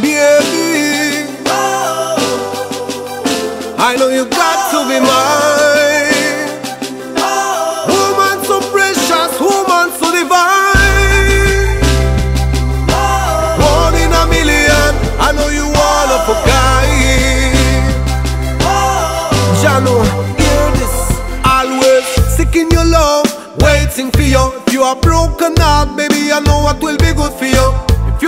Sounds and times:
Exciting music: 0.0s - 28.2s.

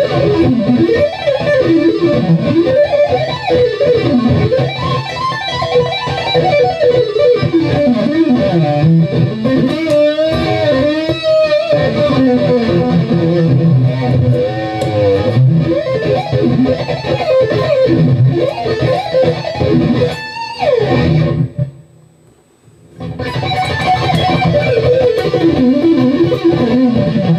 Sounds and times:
Electric guitar: 0.0s - 21.8s, 22.9s - 27.3s.

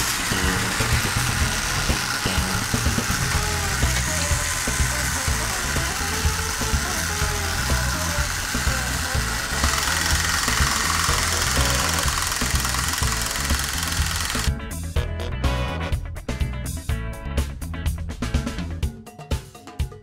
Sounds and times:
Music: 0.0s - 20.0s.

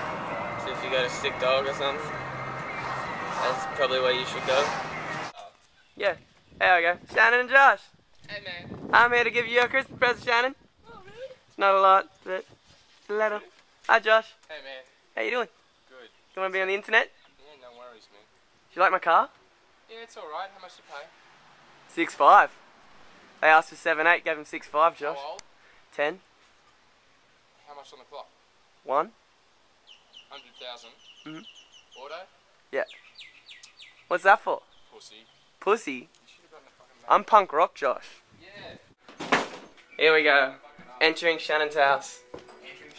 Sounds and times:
Environmental noise: 0.0s - 42.9s.

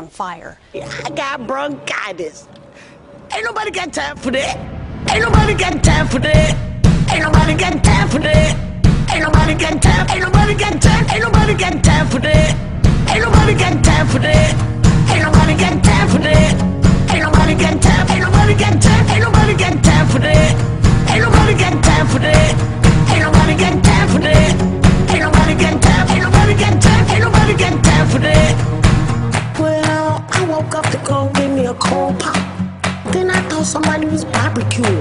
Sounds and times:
Music: 0.6s - 35.0s.

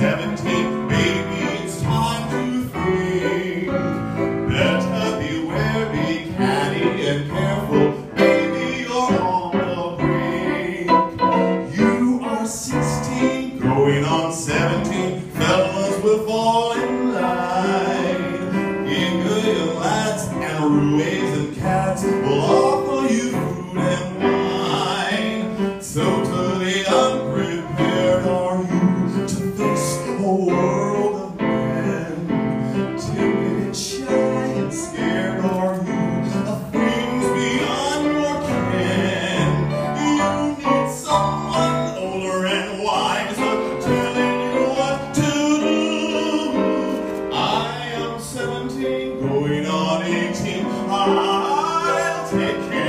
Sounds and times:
Male singing: 0.0s - 52.8s
Music: 0.0s - 52.8s.

